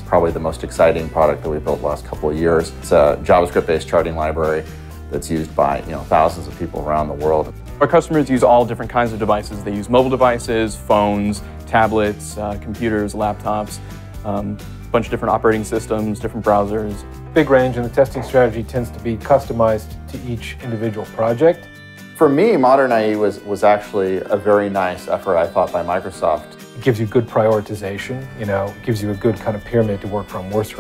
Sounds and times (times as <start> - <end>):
Music: 0.0 - 30.8
Speech: 0.0 - 30.8.